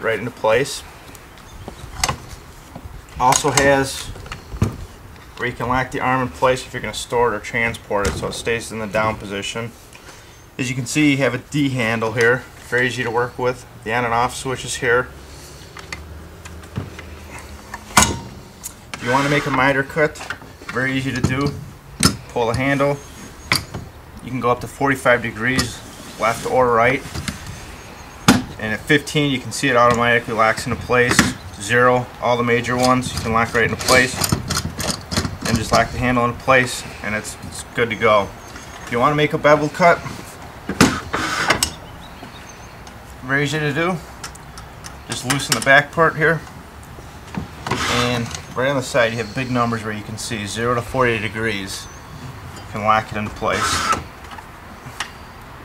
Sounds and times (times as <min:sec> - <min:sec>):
Speech: 0:00.0 - 0:00.9, 0:03.2 - 0:04.2, 0:05.4 - 0:09.8, 0:10.6 - 0:15.1, 0:19.0 - 0:21.6, 0:22.3 - 0:23.0, 0:24.2 - 0:27.1, 0:28.6 - 0:34.3, 0:35.4 - 0:40.1, 0:43.2 - 0:44.1, 0:45.1 - 0:46.5, 0:47.8 - 0:51.9, 0:52.7 - 0:53.8.